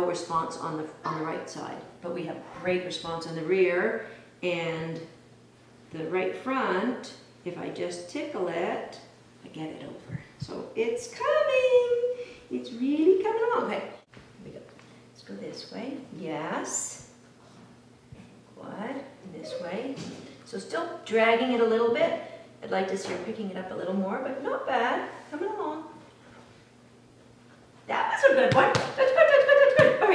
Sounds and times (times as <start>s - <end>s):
Speech: 0.0s - 5.2s, 5.9s - 17.1s, 18.6s - 26.0s, 27.9s - 30.1s.